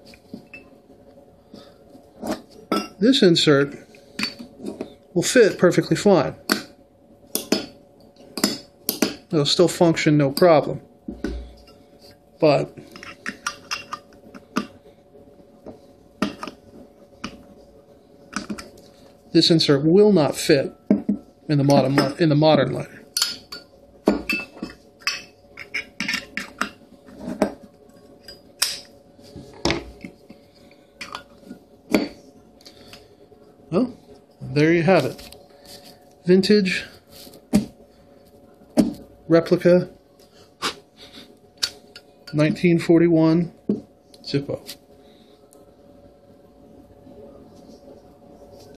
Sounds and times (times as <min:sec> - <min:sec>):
Speech: 0:03.0 - 0:03.8, 0:05.2 - 0:06.4, 0:09.3 - 0:10.8, 0:19.3 - 0:20.8, 0:21.5 - 0:23.0, 0:33.7 - 0:35.2, 0:36.3 - 0:37.0, 0:39.3 - 0:40.0, 0:42.3 - 0:43.6, 0:44.2 - 0:44.8.